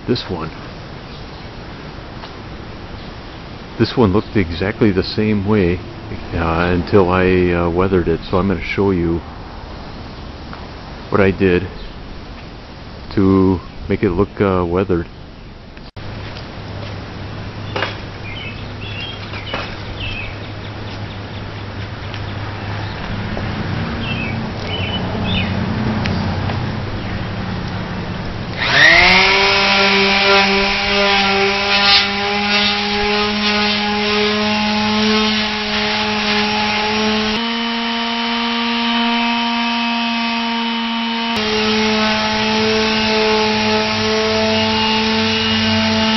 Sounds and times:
Speech: 0.0 - 0.6, 3.8 - 9.2, 11.1 - 11.8, 13.1 - 15.1.

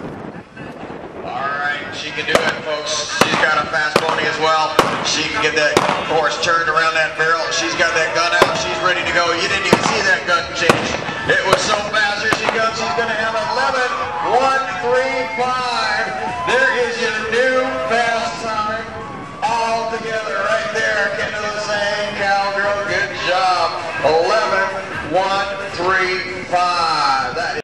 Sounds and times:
Speech: 0.5 - 27.6.

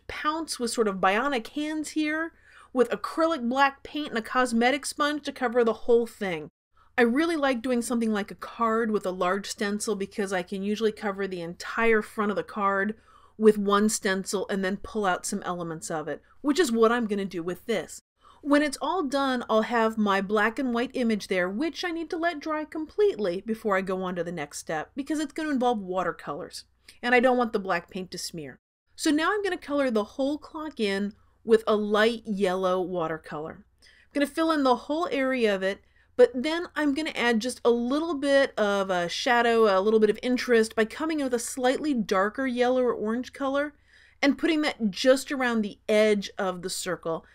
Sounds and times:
Speech: 0.0 - 33.6, 34.2 - 47.2.

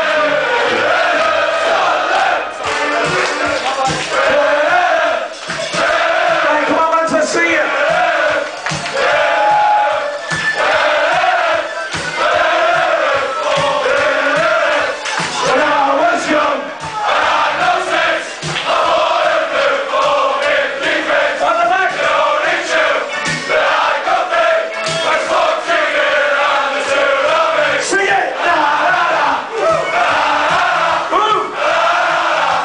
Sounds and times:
Music: 0.0 - 32.6.

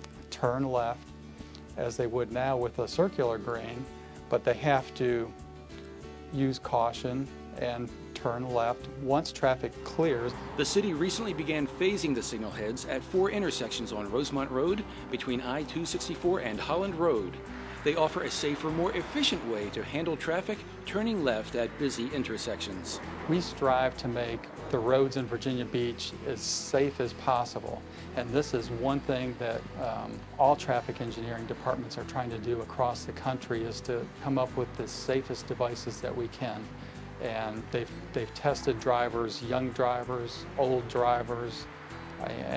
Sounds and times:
Music: 0.0 - 42.5
Speech: 0.3 - 1.0, 1.8 - 5.4, 6.3 - 42.5.

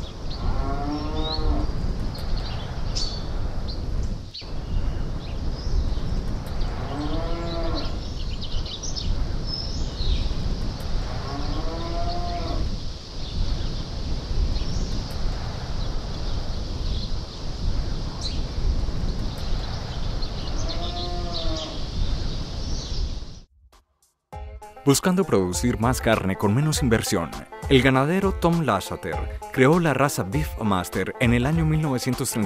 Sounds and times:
Moo: 0.4 - 1.7, 6.8 - 8.0, 11.2 - 12.7, 20.6 - 21.8.

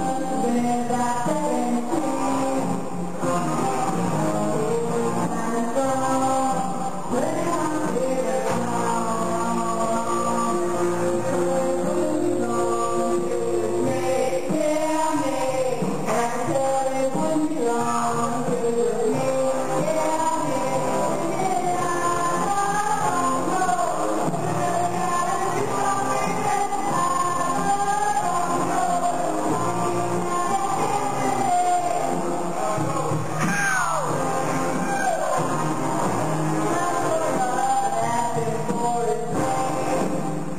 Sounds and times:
Music: 0.0 - 40.5.

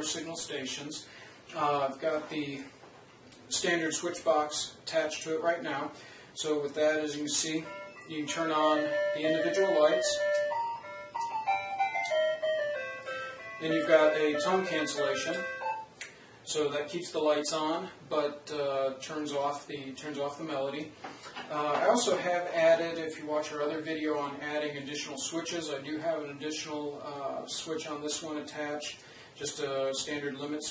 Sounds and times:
Speech: 0.0 - 2.7, 3.5 - 10.2, 13.6 - 15.5, 16.5 - 30.7
Inside, small room: 0.0 - 30.7
Music: 7.6 - 15.9.

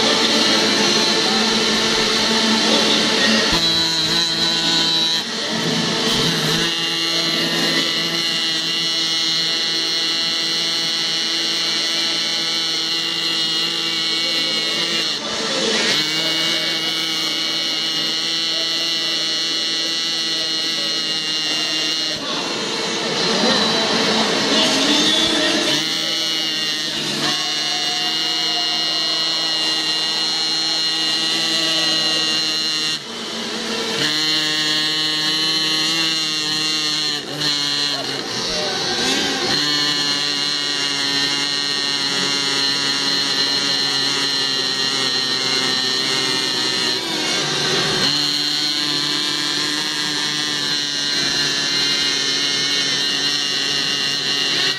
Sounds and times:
Speech: 0.0 - 33.0, 35.2 - 48.1.

